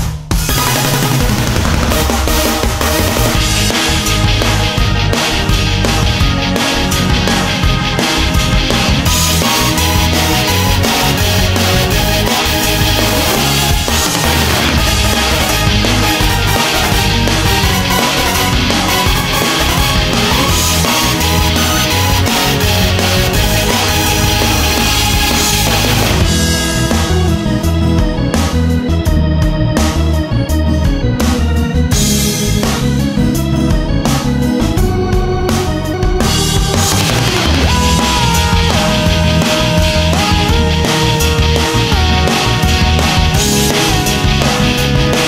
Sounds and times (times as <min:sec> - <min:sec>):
Music: 0:00.0 - 0:45.2.